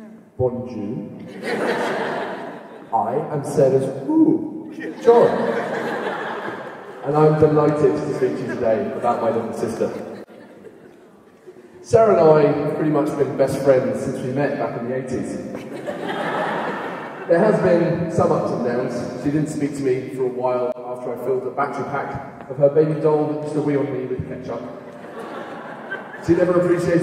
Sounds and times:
Narration, monologue: 0:00.0 - 0:01.8, 0:02.8 - 0:15.9, 0:17.0 - 0:27.0
Male speech, man speaking: 0:00.4 - 0:01.1, 0:02.9 - 0:05.6, 0:07.0 - 0:10.1, 0:11.8 - 0:15.5, 0:17.3 - 0:24.7, 0:26.2 - 0:27.0.

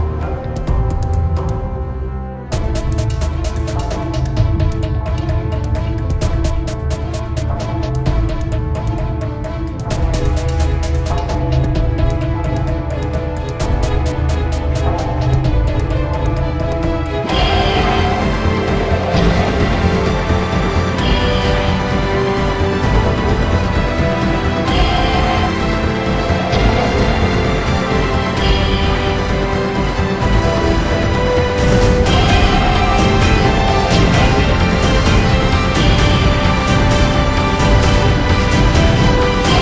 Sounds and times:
Video game music: 0:00.0 - 0:39.6.

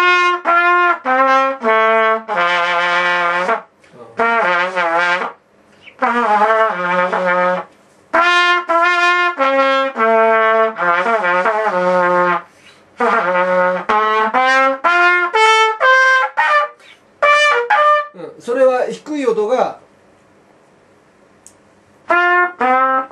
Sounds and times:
Trumpet: 0:00.0 - 0:18.2, 0:22.0 - 0:23.1.

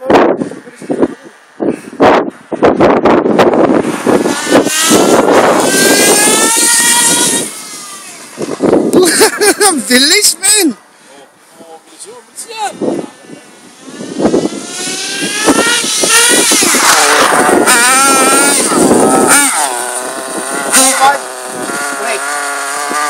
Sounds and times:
Vehicle: 0:00.0 - 0:23.1.

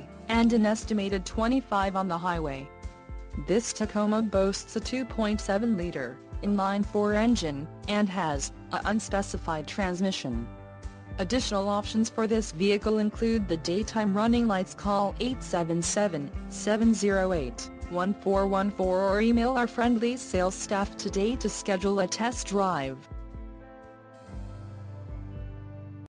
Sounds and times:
Music: 0:00.0 - 0:26.1
Speech: 0:00.3 - 0:02.7, 0:03.4 - 0:10.4, 0:11.2 - 0:23.0.

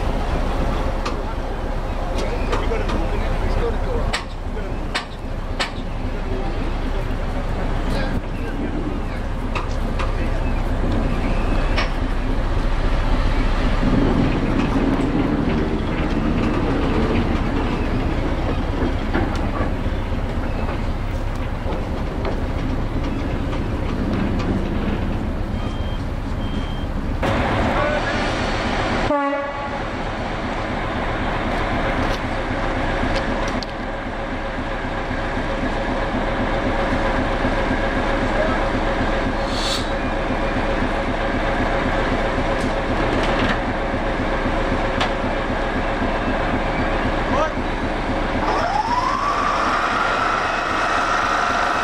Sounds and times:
Railroad car, train wagon: 0:00.0 - 0:51.8
Train horn: 0:29.1 - 0:29.9.

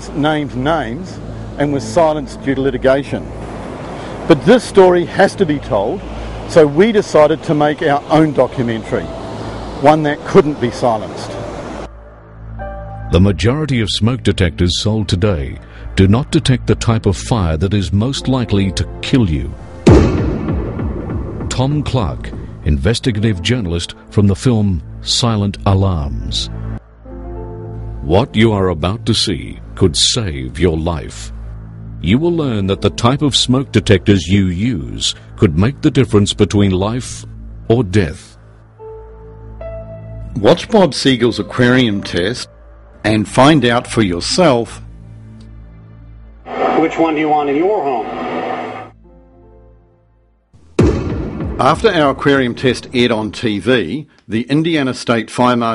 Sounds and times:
Narration, monologue: 0:00.0 - 0:48.1, 0:48.9 - 0:55.7
Music: 0:00.0 - 0:55.7.

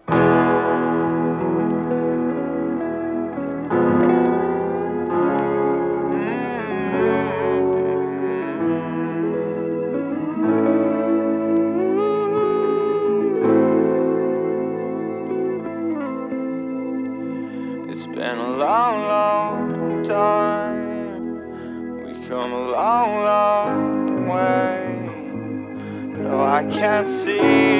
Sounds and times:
Music: 0:00.0 - 0:27.7.

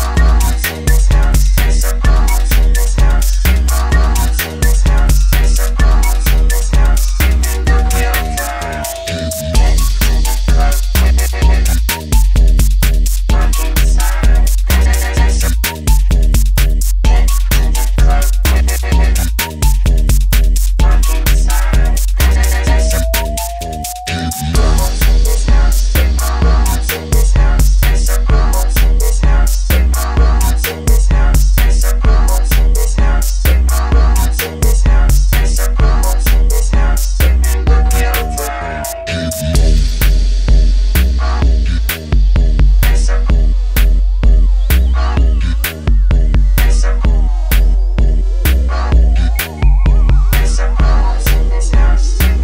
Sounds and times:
Music: 0:00.0 - 0:52.4.

